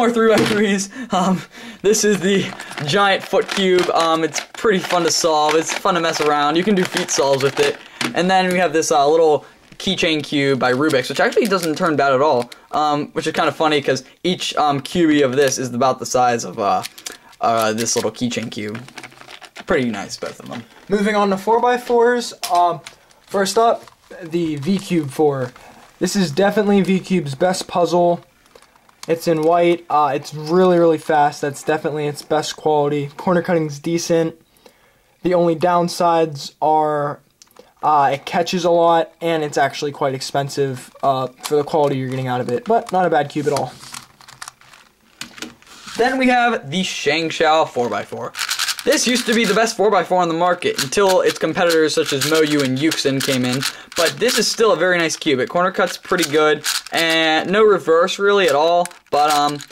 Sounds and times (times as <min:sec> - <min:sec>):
Speech: 0:00.0 - 0:18.9, 0:19.7 - 0:28.3, 0:29.1 - 0:34.4, 0:35.2 - 0:37.2, 0:37.8 - 0:43.9, 0:46.0 - 0:59.7
Inside, small room: 0:00.0 - 0:59.7.